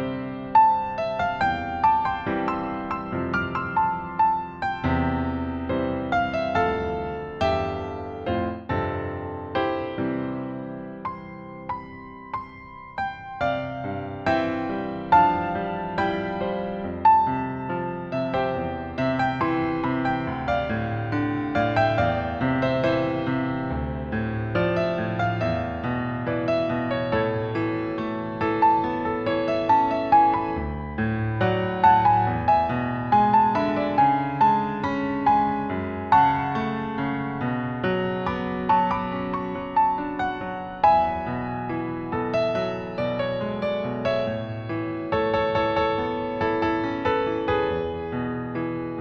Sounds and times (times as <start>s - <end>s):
Electric piano: 0.0s - 49.0s.